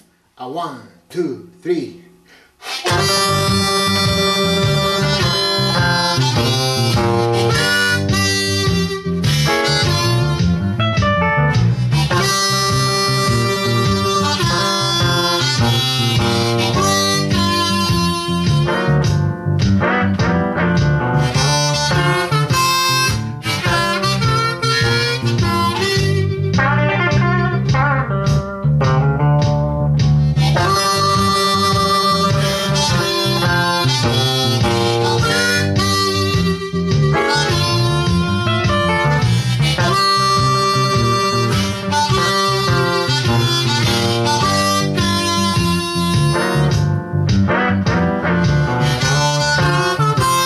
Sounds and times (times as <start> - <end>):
Blues: 1.6 - 50.4
Electric guitar: 2.6 - 50.4.